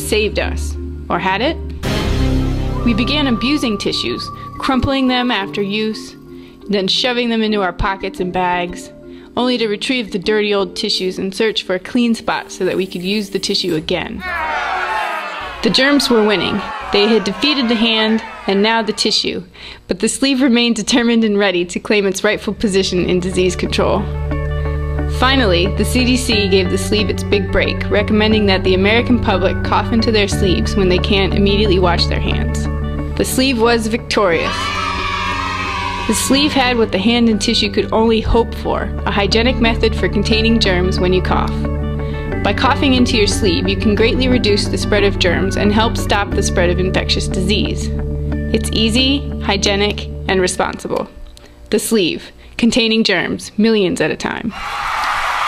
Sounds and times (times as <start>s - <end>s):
Speech: 0.0s - 1.6s, 2.8s - 14.5s, 15.6s - 24.1s, 25.2s - 34.5s, 36.1s - 41.6s, 42.4s - 47.9s, 48.6s - 51.1s, 51.7s - 54.5s
Music: 0.0s - 19.7s, 20.7s - 52.4s.